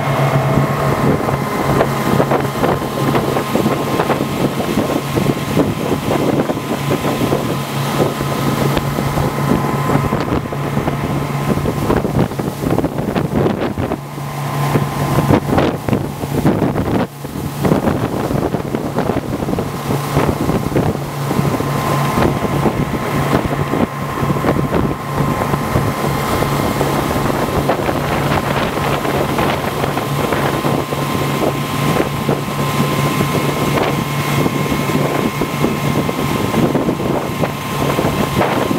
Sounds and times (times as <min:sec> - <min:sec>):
Motorboat, speedboat: 0:00.0 - 0:38.7.